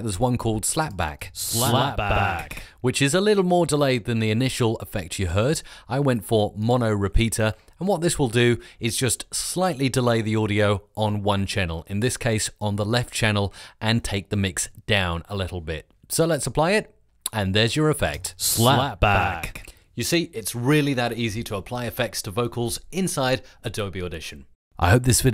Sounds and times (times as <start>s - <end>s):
Speech synthesizer: 1.4s - 2.5s, 18.4s - 19.6s, 23.8s - 25.3s.